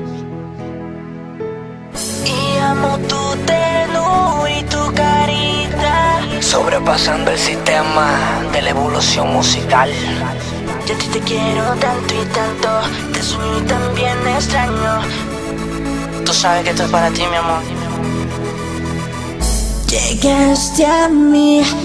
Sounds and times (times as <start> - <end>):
Music: 0.0 - 21.8.